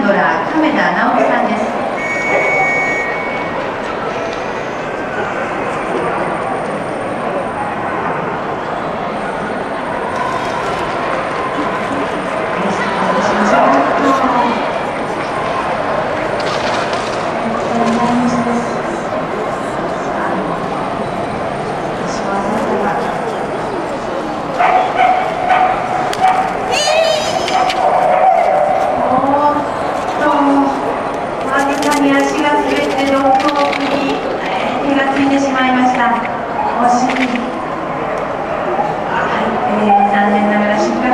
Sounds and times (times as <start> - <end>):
Speech: 0.0 - 1.9, 11.5 - 15.3, 17.4 - 20.9, 21.9 - 25.1, 29.0 - 37.6, 38.7 - 41.1
Bow-wow: 24.6 - 26.5.